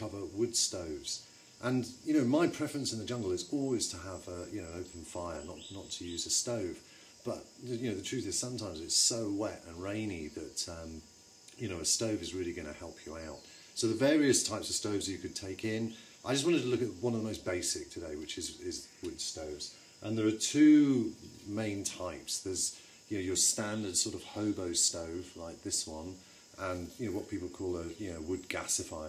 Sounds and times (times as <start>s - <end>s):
Speech: 0.0s - 29.0s.